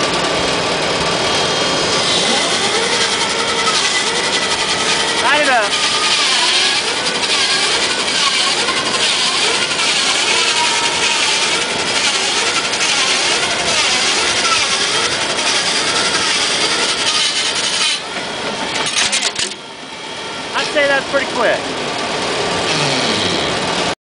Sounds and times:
Sawing: 0:00.0 - 0:24.0.

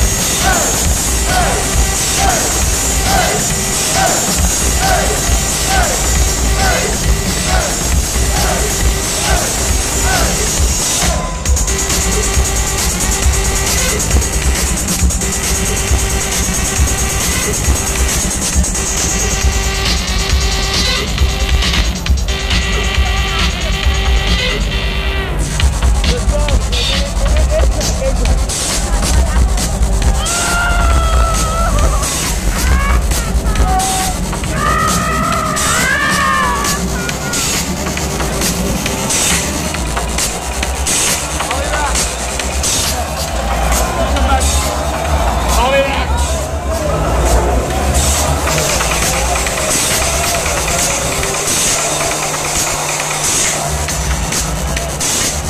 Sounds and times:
Techno: 0:00.0 - 0:55.4.

